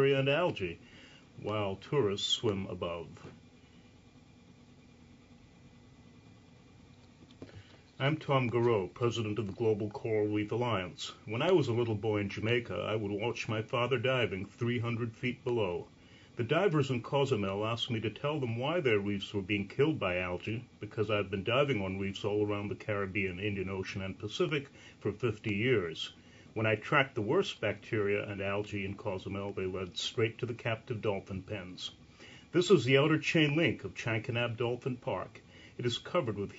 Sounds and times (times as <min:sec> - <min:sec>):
Speech: 0:00.0 - 0:00.8, 0:01.4 - 0:03.4, 0:08.0 - 0:36.5.